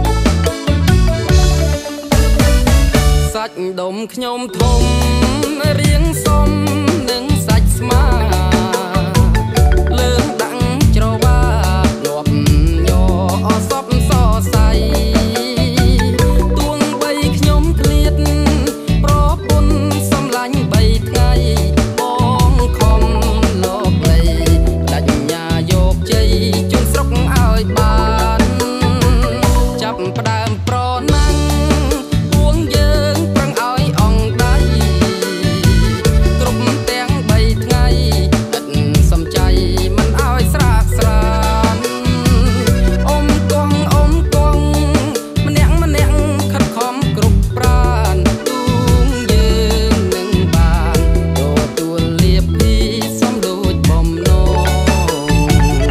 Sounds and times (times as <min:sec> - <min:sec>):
Music: 0:00.0 - 0:55.9.